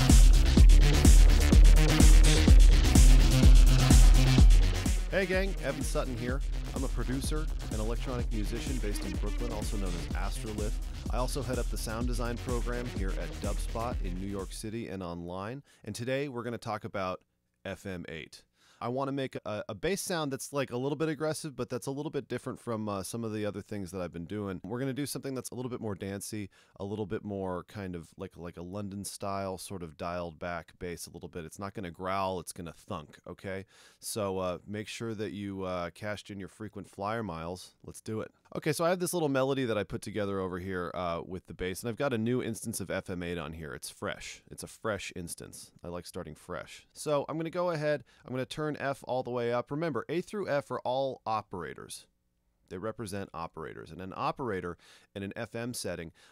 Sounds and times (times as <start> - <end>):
Music: 0.0 - 14.7
Speech: 5.1 - 52.1, 52.7 - 56.2.